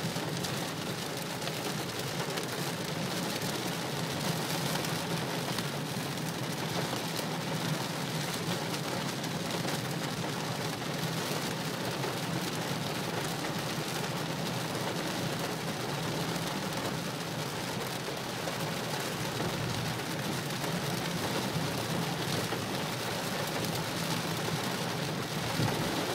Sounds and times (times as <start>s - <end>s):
Rain on surface: 0.0s - 26.1s.